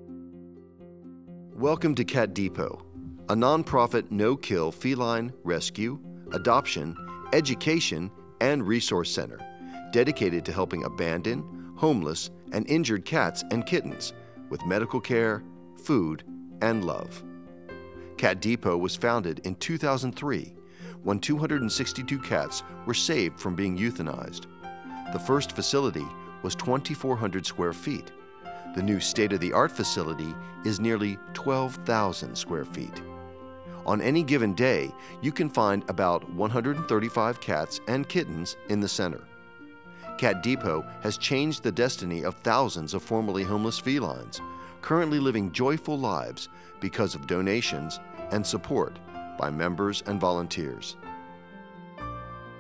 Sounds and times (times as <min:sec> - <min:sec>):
Music: 0:00.0 - 0:52.6
Speech: 0:01.6 - 0:17.2, 0:18.2 - 0:20.5, 0:21.1 - 0:24.4, 0:25.1 - 0:28.1, 0:28.8 - 0:33.0, 0:33.9 - 0:39.2, 0:40.2 - 0:51.0.